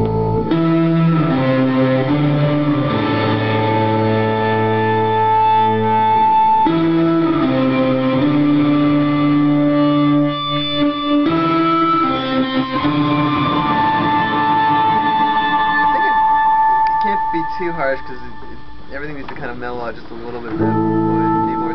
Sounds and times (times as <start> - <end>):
Bass guitar: 0.0 - 19.5, 20.4 - 21.7
Electric guitar: 0.0 - 19.5, 20.3 - 21.7.